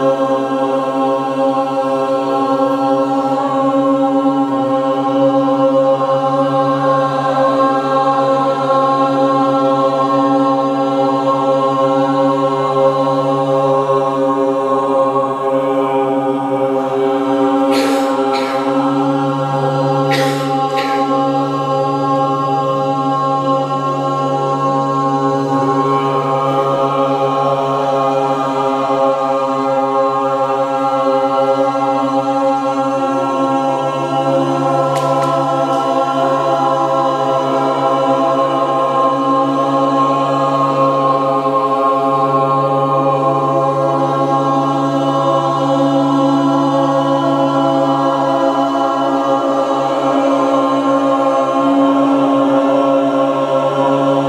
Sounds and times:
Mantra: 0.0s - 54.2s.

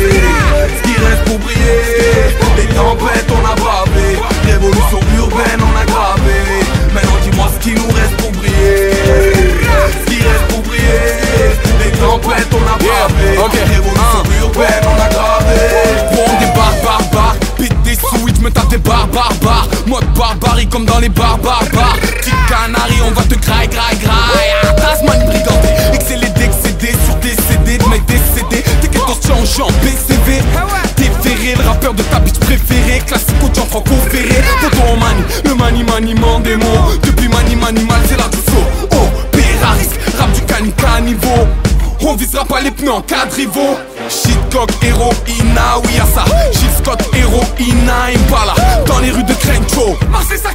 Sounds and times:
Music: 0.0s - 50.5s.

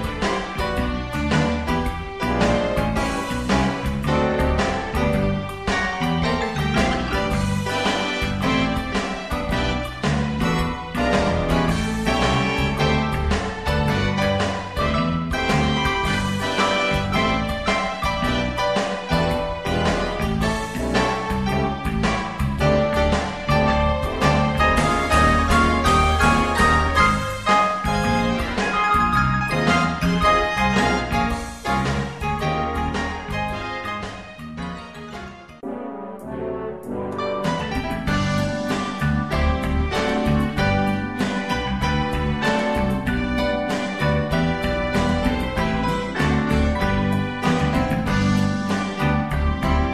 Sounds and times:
Background music: 0.0s - 49.9s
Christmas music: 0.0s - 49.9s
Rhythm and blues: 0.0s - 49.9s.

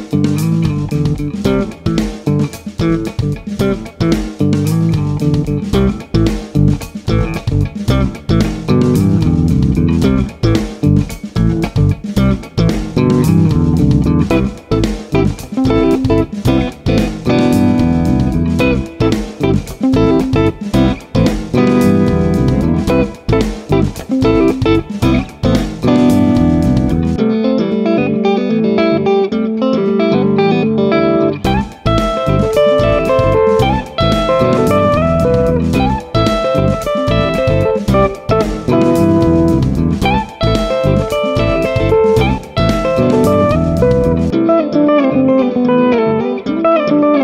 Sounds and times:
Bass guitar: 0.0s - 47.2s.

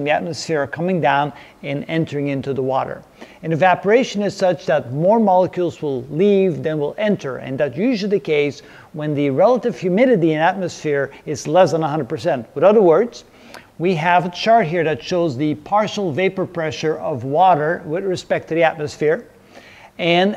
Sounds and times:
Speech: 0.0s - 19.3s, 20.0s - 20.3s.

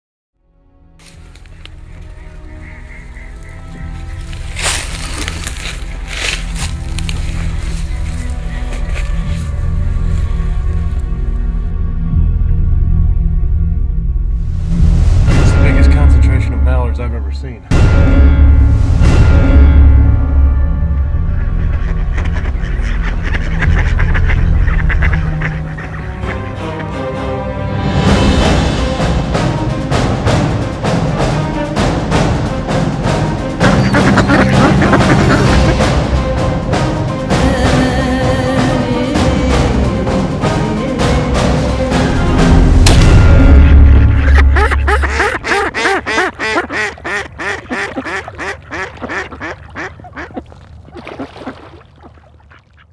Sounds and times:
Music: 0.4s - 49.9s
Duck: 21.5s - 26.9s, 33.6s - 35.8s, 44.3s - 50.5s.

